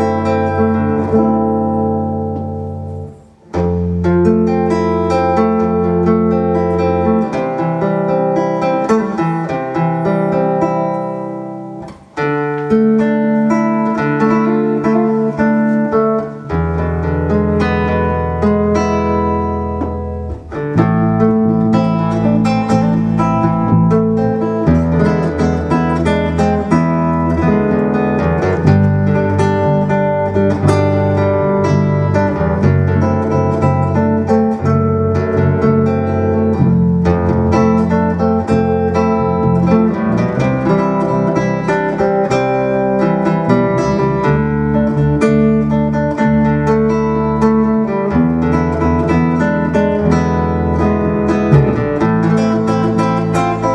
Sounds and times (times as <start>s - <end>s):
Strum: 0.0s - 53.7s.